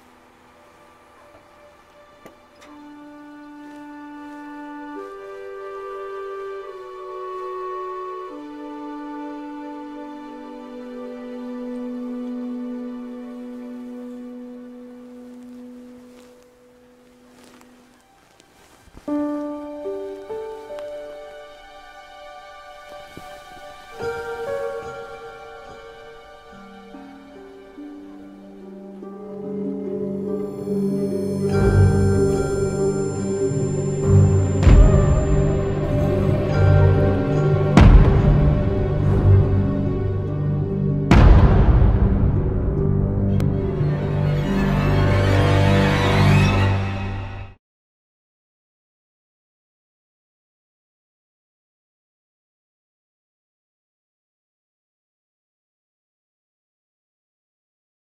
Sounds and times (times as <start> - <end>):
Music: 0.0 - 47.6.